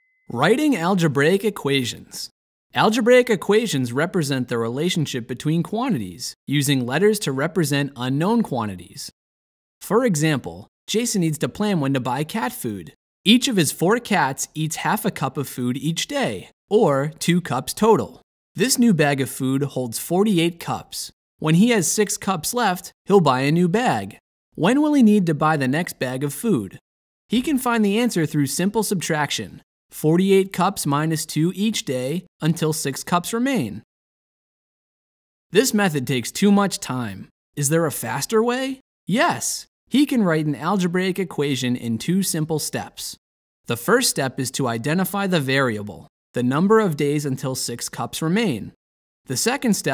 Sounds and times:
Speech: 0.3s - 9.2s, 9.8s - 33.9s, 35.6s - 49.9s.

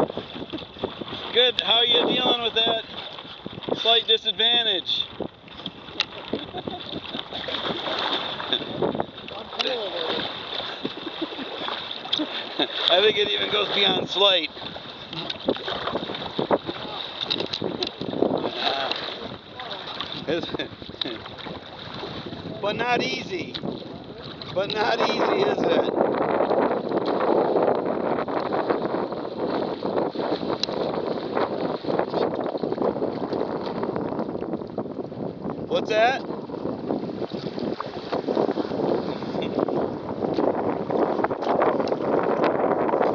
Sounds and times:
Boat, Water vehicle: 0.0s - 43.1s.

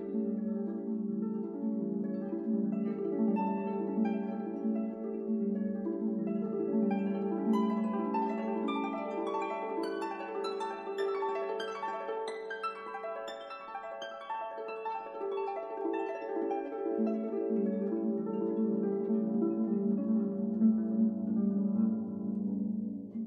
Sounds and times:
Music: 0.0s - 23.2s.

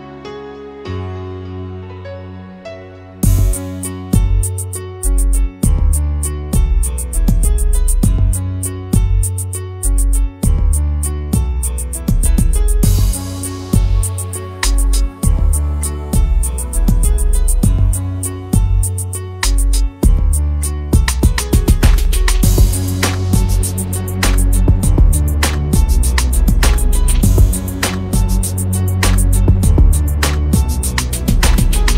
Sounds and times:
Music: 0.0s - 31.9s.

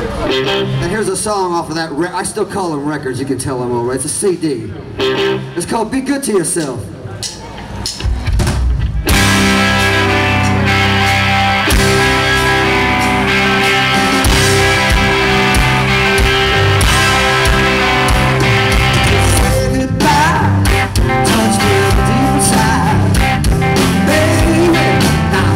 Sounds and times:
Music: 0.0s - 1.1s, 4.9s - 5.6s, 7.2s - 25.5s
Speech: 0.0s - 4.8s, 5.6s - 7.4s.

